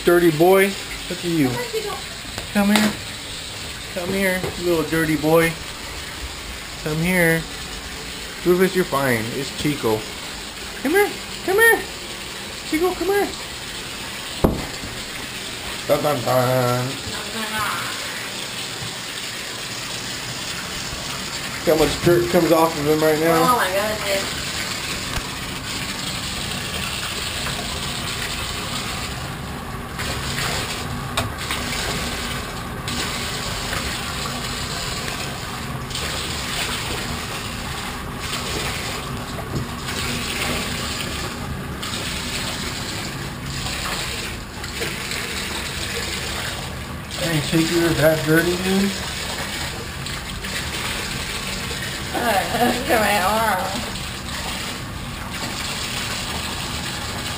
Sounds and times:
Bathtub (filling or washing): 0.0 - 57.3
Sink (filling or washing): 0.0 - 57.3
Water: 0.0 - 57.3
Water tap, faucet: 0.0 - 57.3.

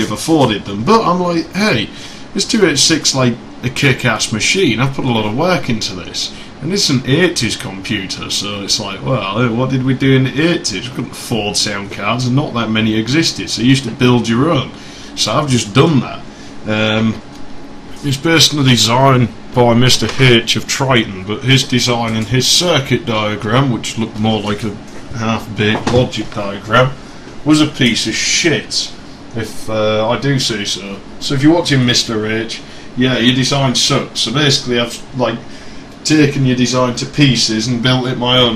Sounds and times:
Speech: 0.0 - 17.3, 18.0 - 38.5.

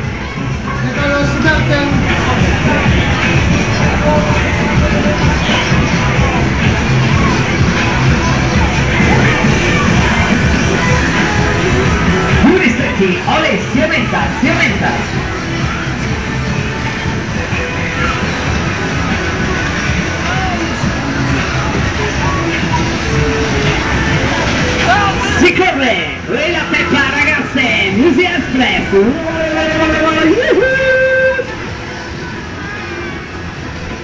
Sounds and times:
Music: 0.0 - 34.0.

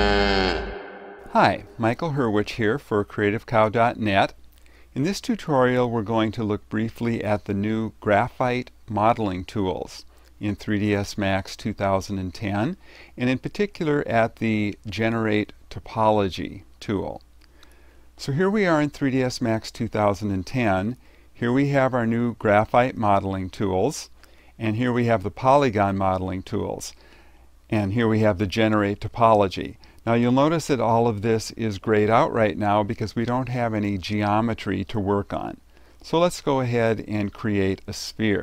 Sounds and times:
Speech: 1.3 - 4.4, 5.0 - 17.2, 18.2 - 27.0, 27.7 - 38.4.

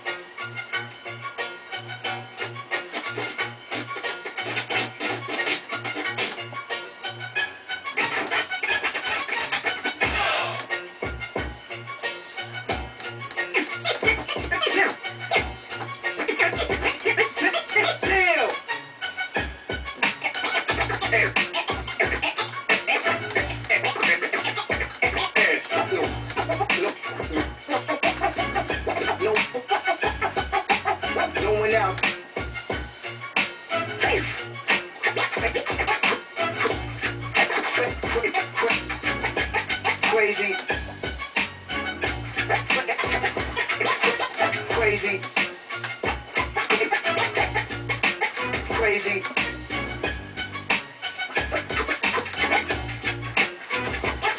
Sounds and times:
Scratching (performance technique): 2.4 - 6.7, 7.9 - 11.5, 12.6 - 54.3.

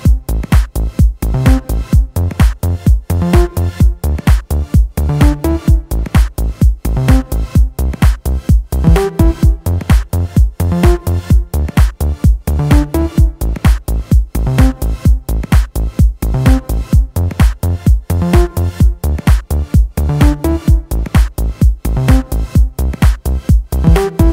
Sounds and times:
Soundtrack music: 0.0 - 24.3.

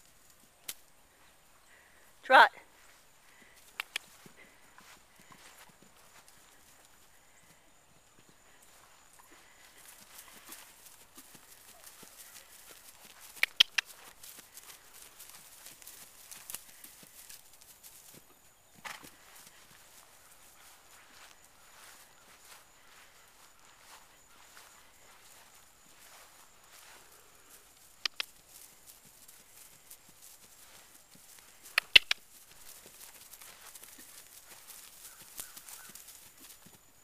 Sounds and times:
Clip-clop: 2.7 - 37.0.

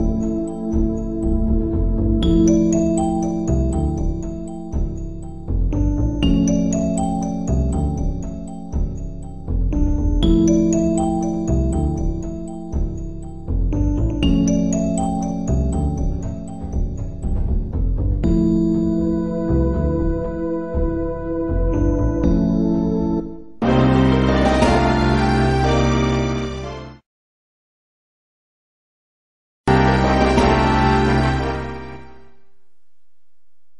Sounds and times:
Video game music: 0.0 - 27.0, 29.7 - 32.5.

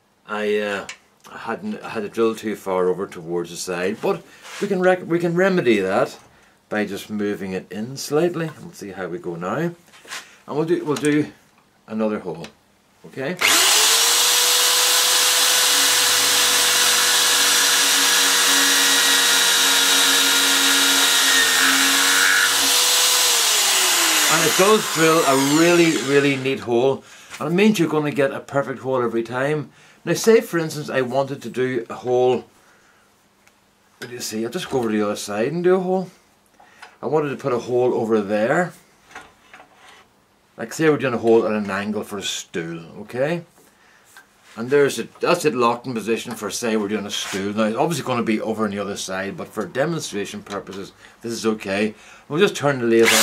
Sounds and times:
Speech: 0.2 - 9.8, 10.5 - 13.4, 24.3 - 32.5, 34.0 - 36.2, 37.0 - 38.8, 40.6 - 43.5, 44.6 - 53.1.

